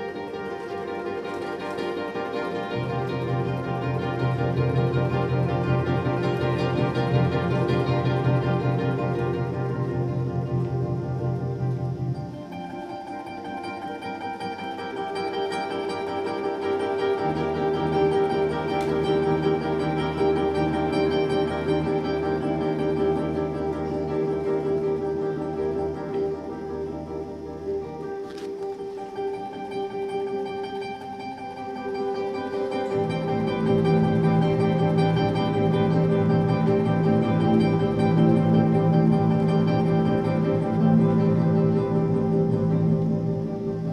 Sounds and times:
Classical music: 0.0 - 43.9
Guitar: 0.0 - 43.9.

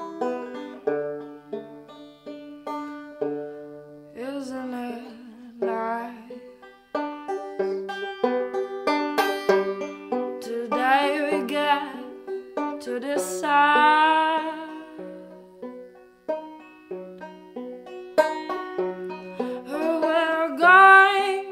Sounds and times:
Music: 0.0 - 21.5.

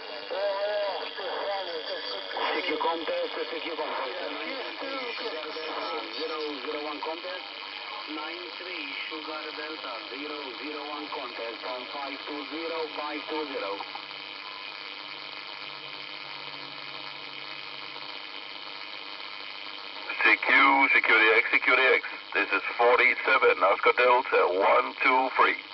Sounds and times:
Radio: 0.0 - 25.7
Speech: 0.3 - 13.8, 20.1 - 25.7.

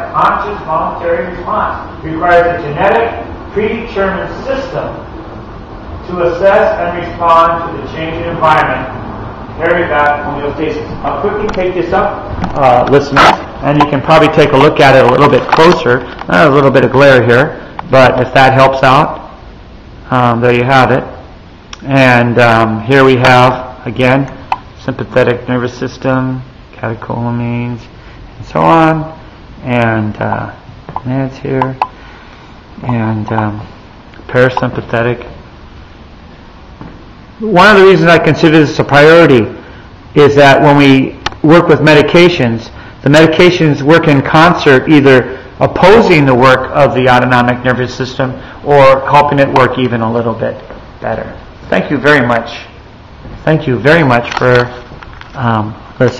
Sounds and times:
Speech: 0.0 - 5.1, 6.0 - 9.0, 9.6 - 19.3, 20.0 - 21.2, 21.8 - 31.8, 32.8 - 33.7, 34.3 - 35.4, 37.4 - 52.8, 53.4 - 56.1.

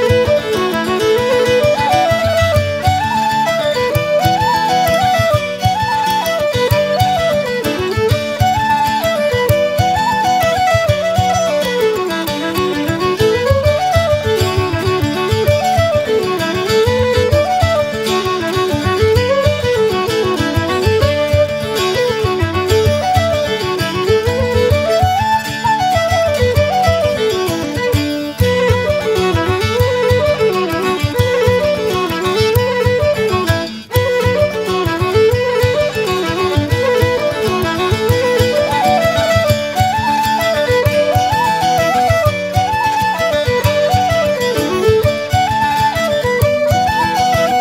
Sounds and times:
Violin, fiddle: 0.0 - 47.6.

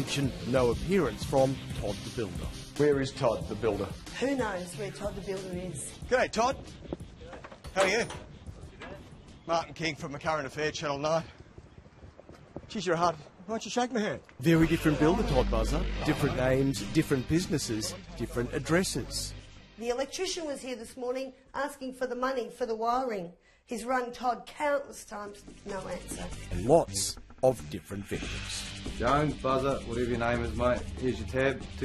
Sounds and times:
Music: 0.0 - 10.6, 14.4 - 22.3, 24.4 - 31.8
Speech: 12.8 - 19.3, 25.7 - 31.8.

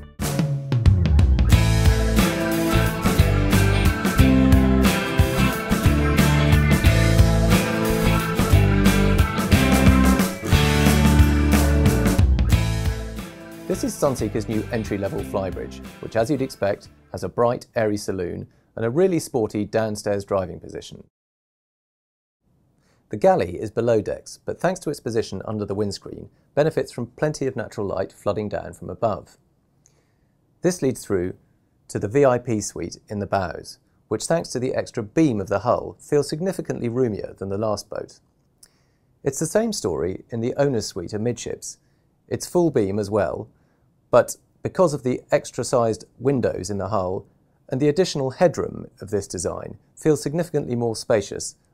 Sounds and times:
Speech: 13.7 - 21.1, 23.1 - 29.4, 30.6 - 38.2, 39.3 - 43.5, 44.2 - 51.6.

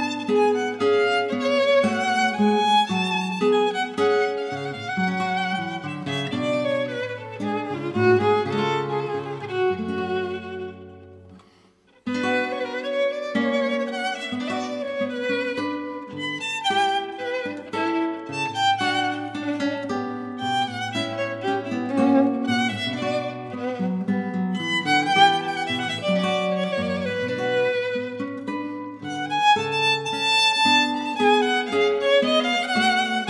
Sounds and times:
Acoustic guitar: 0.0 - 33.3
Strum: 0.0 - 33.3
Violin, fiddle: 0.0 - 33.3.

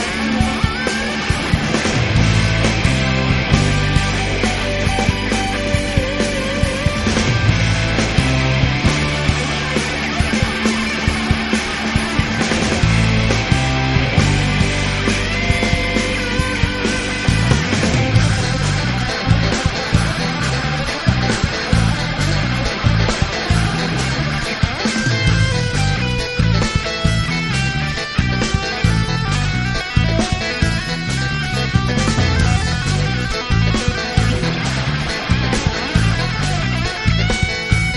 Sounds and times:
Pop music: 0.0 - 37.9
Progressive rock: 0.0 - 37.9.

